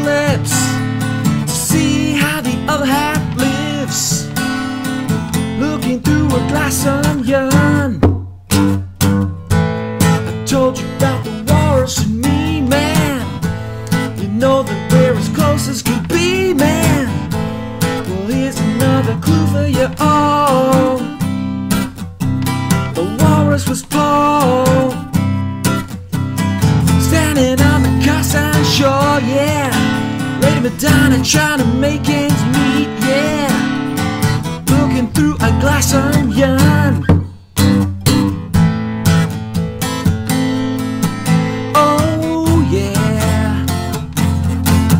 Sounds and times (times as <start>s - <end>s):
Music: 0.0s - 44.9s.